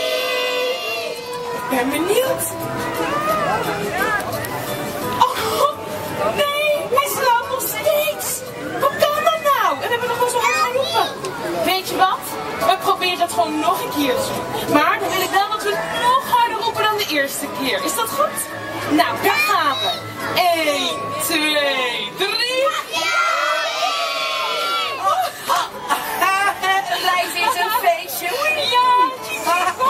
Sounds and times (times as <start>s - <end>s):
Music: 0.0s - 29.9s.